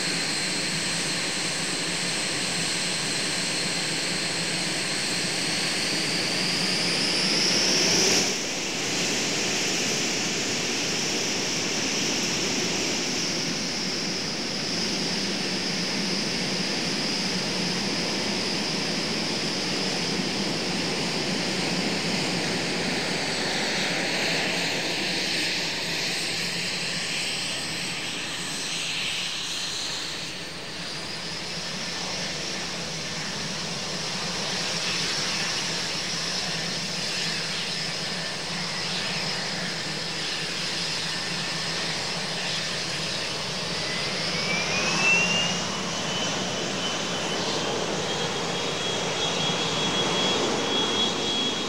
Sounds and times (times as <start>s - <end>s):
Fixed-wing aircraft, airplane: 0.0s - 51.6s.